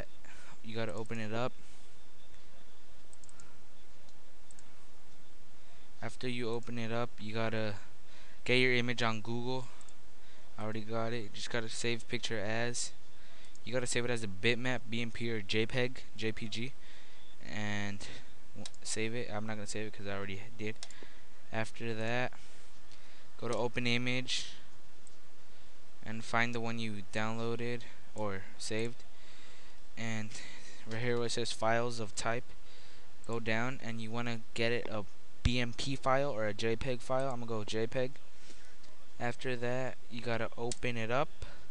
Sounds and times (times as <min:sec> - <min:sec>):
Speech: 0:00.0 - 0:01.6, 0:06.0 - 0:09.8, 0:10.6 - 0:13.0, 0:13.7 - 0:16.8, 0:17.4 - 0:20.8, 0:21.5 - 0:22.4, 0:23.4 - 0:24.6, 0:26.0 - 0:29.0, 0:30.0 - 0:32.5, 0:33.3 - 0:38.2, 0:39.2 - 0:41.5.